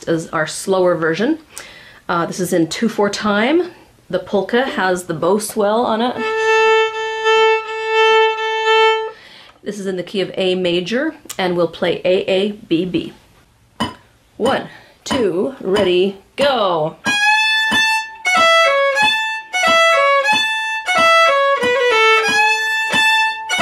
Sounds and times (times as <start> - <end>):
Speech: 0.0 - 1.5, 2.1 - 6.3, 9.6 - 13.2, 14.4 - 17.0
Violin, fiddle: 6.2 - 9.2, 17.0 - 23.6.